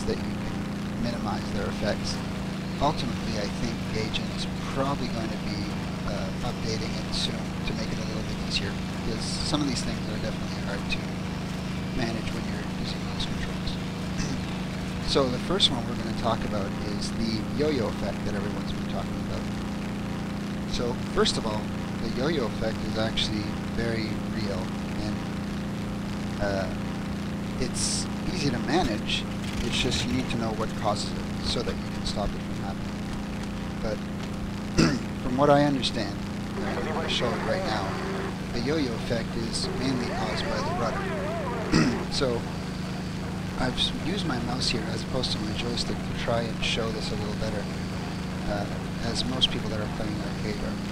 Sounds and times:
Speech: 0:00.0 - 0:11.3, 0:11.9 - 0:19.5, 0:20.7 - 0:25.4, 0:26.3 - 0:26.8, 0:27.6 - 0:33.0, 0:33.8 - 0:34.0, 0:34.8 - 0:42.6, 0:43.5 - 0:47.7, 0:48.4 - 0:50.9.

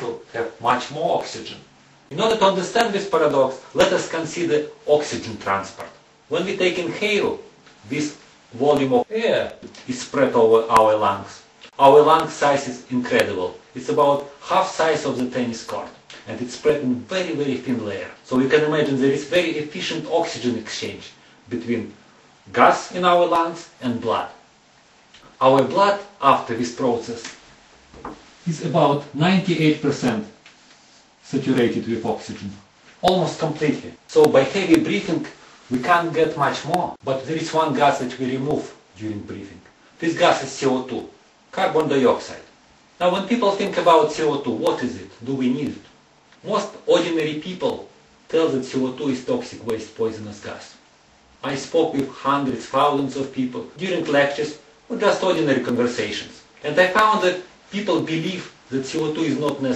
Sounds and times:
Speech: 0:00.0 - 0:24.4, 0:25.4 - 0:27.4, 0:28.4 - 0:30.4, 0:31.2 - 0:50.8, 0:51.4 - 0:59.7.

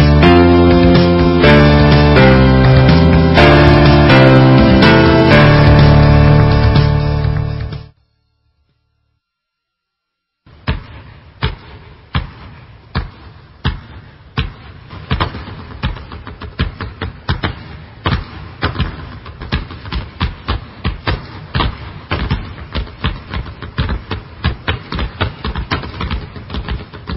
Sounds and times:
Basketball bounce: 0:10.6 - 0:27.1.

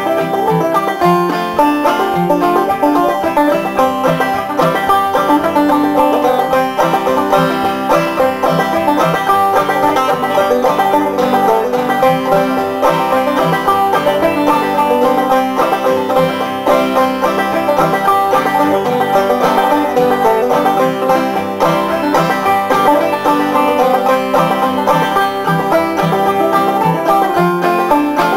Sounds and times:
Music: 0:00.0 - 0:28.3.

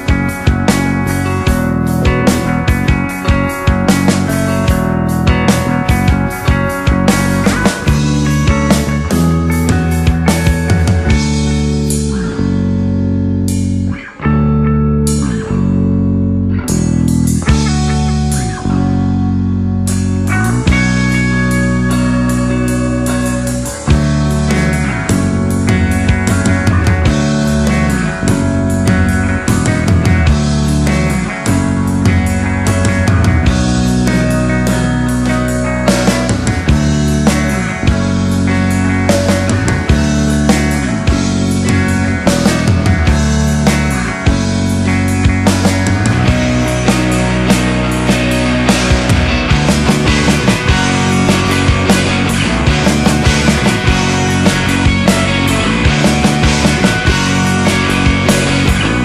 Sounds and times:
Progressive rock: 0:00.0 - 0:59.0.

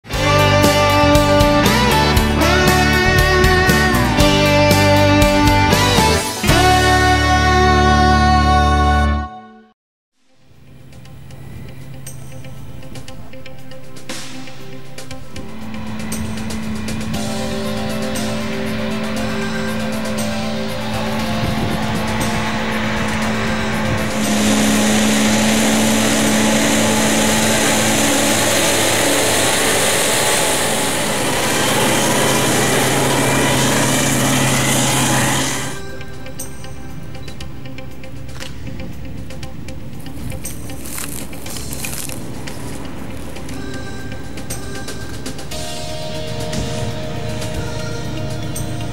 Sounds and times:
Engine: 0:00.0 - 0:08.9, 0:10.2 - 0:48.9
Music: 0:00.0 - 0:48.9.

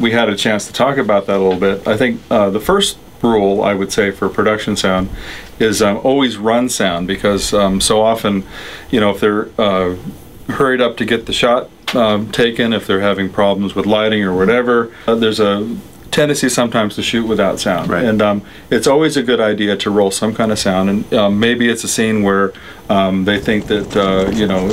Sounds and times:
Speech: 0:00.0 - 0:24.7.

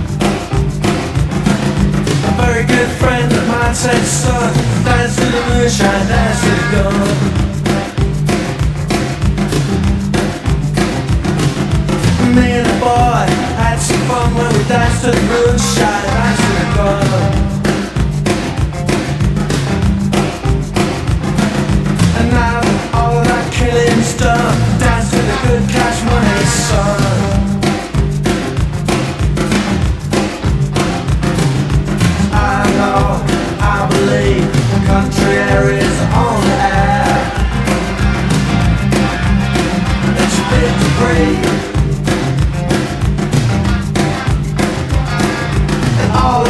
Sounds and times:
Rock and roll: 0:00.0 - 0:46.5.

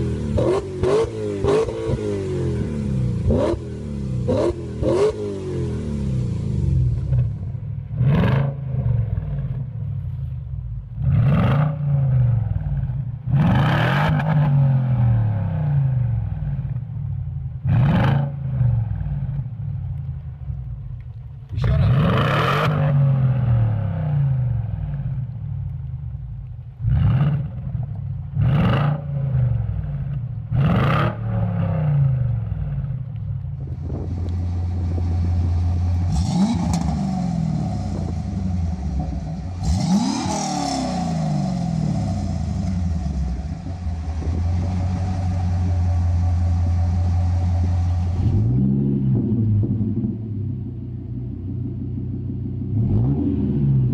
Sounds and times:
Accelerating, revving, vroom: 0:00.0 - 0:06.7, 0:08.0 - 0:08.8, 0:11.0 - 0:12.3, 0:13.3 - 0:15.8, 0:17.7 - 0:18.6, 0:21.8 - 0:24.4, 0:26.9 - 0:27.6, 0:28.4 - 0:29.5, 0:30.6 - 0:32.3, 0:36.1 - 0:38.2, 0:39.6 - 0:42.8, 0:52.7 - 0:53.9
Light engine (high frequency): 0:00.0 - 0:19.7, 0:26.8 - 0:53.9
Car: 0:00.0 - 0:53.9.

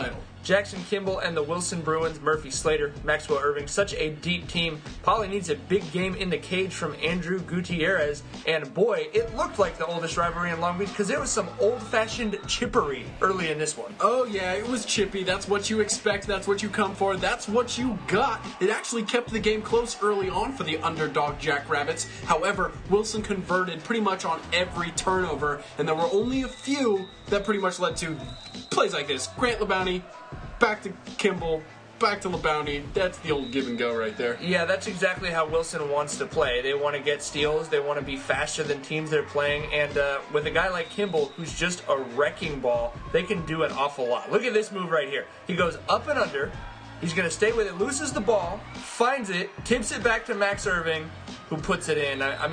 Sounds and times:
Music: 0:00.0 - 0:52.5
Speech: 0:00.0 - 0:52.5.

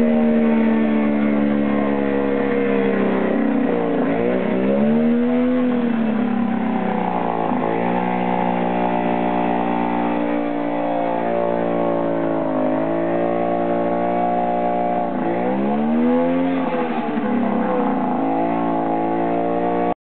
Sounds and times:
Medium engine (mid frequency): 0:00.0 - 0:20.0.

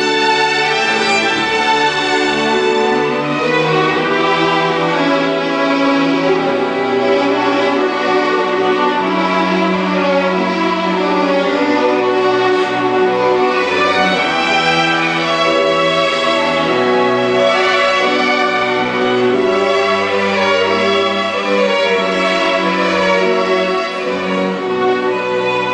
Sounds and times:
Violin, fiddle: 0:00.0 - 0:25.7.

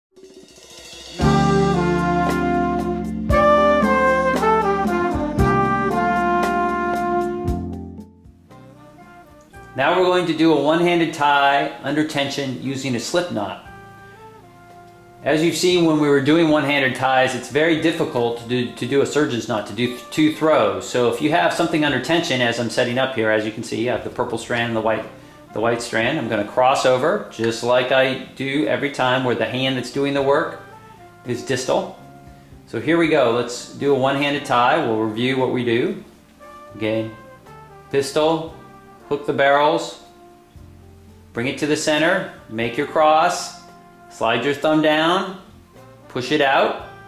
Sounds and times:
Trumpet: 0:00.2 - 0:47.0.

